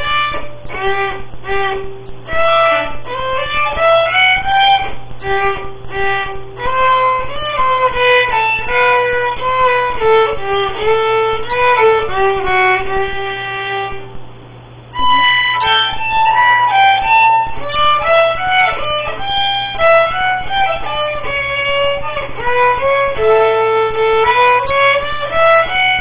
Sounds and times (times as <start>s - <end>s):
Violin, fiddle: 0.0s - 14.2s, 14.9s - 26.0s.